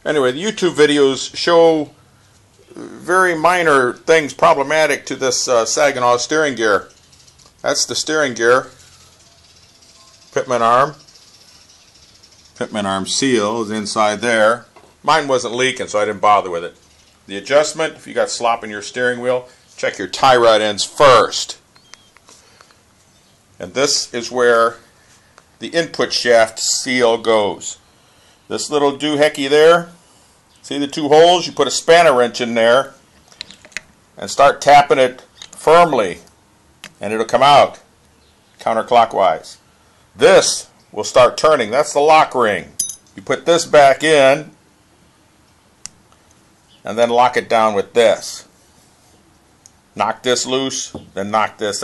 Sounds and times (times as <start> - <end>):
Speech: 0.0 - 2.0, 2.6 - 6.9, 7.6 - 8.8, 10.3 - 11.0, 12.6 - 21.6, 23.6 - 24.8, 25.6 - 27.8, 28.5 - 30.0, 30.6 - 33.0, 34.2 - 36.3, 37.0 - 37.9, 38.6 - 39.6, 40.2 - 44.6, 46.8 - 48.5, 50.0 - 51.8.